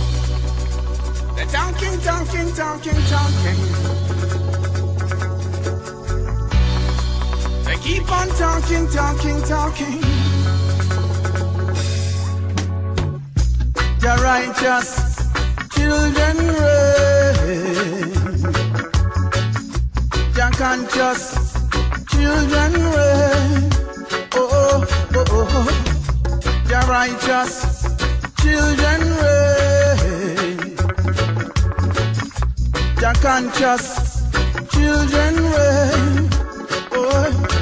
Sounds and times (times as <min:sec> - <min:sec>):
Music: 0:00.0 - 0:37.6
Male singing: 0:01.4 - 0:04.0, 0:07.7 - 0:10.3, 0:14.0 - 0:18.6, 0:20.4 - 0:21.5, 0:22.1 - 0:26.1, 0:26.7 - 0:27.8, 0:28.4 - 0:30.9, 0:33.0 - 0:37.6.